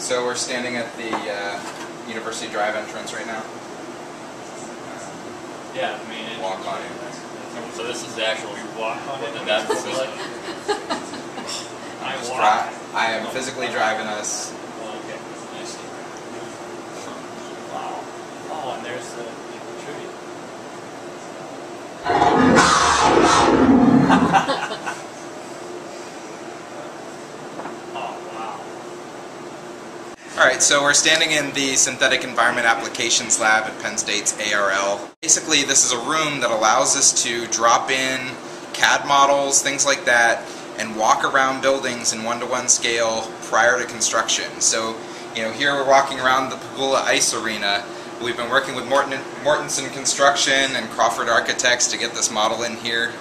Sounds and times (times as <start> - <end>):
Speech: 0.0 - 3.6, 4.5 - 10.4, 12.0 - 20.2, 27.9 - 28.8, 30.2 - 53.2.